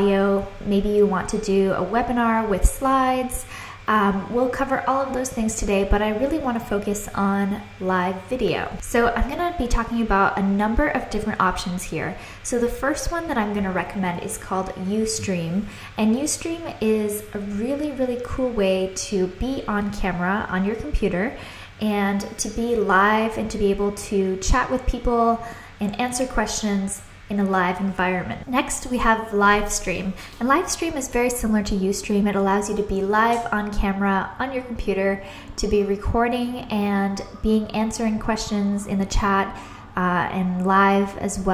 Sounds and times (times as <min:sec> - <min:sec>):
Speech: 0:00.0 - 0:41.5.